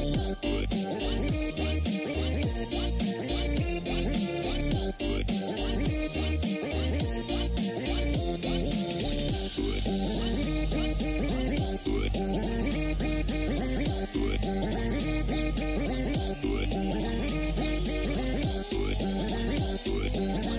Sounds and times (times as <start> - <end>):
Music: 0.0 - 20.5.